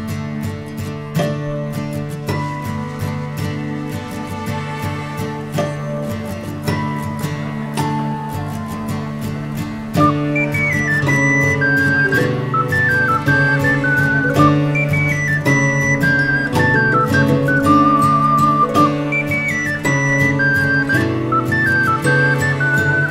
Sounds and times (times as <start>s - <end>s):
Music: 0.0s - 23.1s.